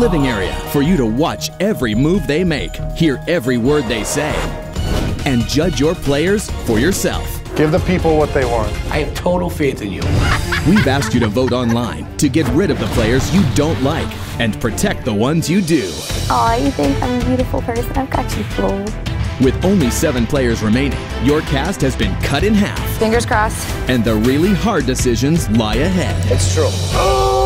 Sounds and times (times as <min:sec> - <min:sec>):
Speech: 0:00.0 - 0:04.4, 0:05.3 - 0:10.0, 0:10.7 - 0:26.8
Music: 0:00.0 - 0:27.4.